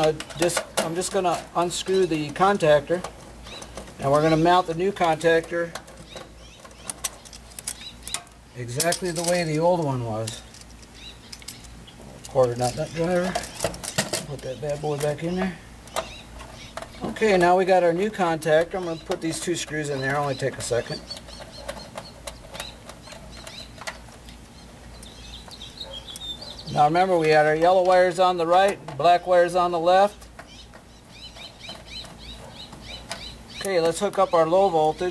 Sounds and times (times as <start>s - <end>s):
Speech: 0.0s - 3.1s, 4.0s - 5.8s, 8.6s - 10.4s, 12.1s - 13.4s, 14.2s - 15.6s, 17.0s - 21.0s, 26.7s - 30.2s, 33.6s - 35.1s.